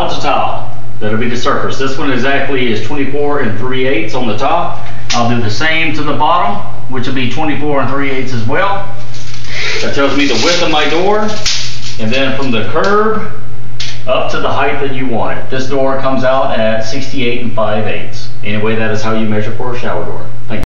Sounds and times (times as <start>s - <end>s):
Speech: 0.0s - 9.0s, 9.8s - 11.4s, 12.0s - 13.4s, 14.1s - 20.6s.